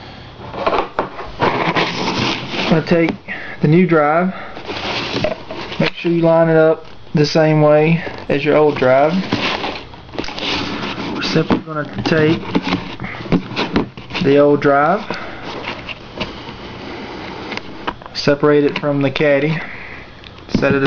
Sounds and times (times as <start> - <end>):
Speech: 2.7 - 4.4, 5.8 - 9.2, 11.2 - 12.4, 14.2 - 15.1, 18.2 - 19.6, 20.5 - 20.8.